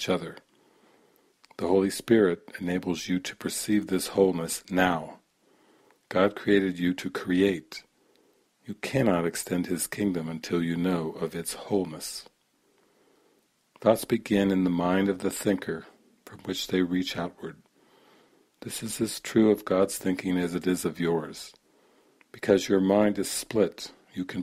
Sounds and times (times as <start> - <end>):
Narration, monologue: 0.0 - 24.4.